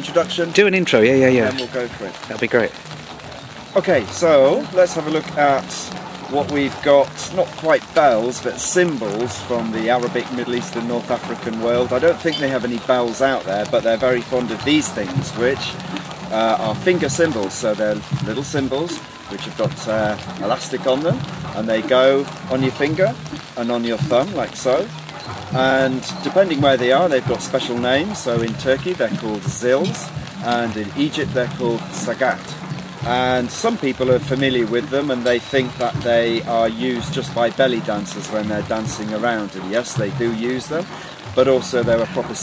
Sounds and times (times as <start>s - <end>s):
Speech: 0.0s - 2.8s, 3.7s - 24.9s, 25.6s - 42.4s
Drum: 14.4s - 42.4s.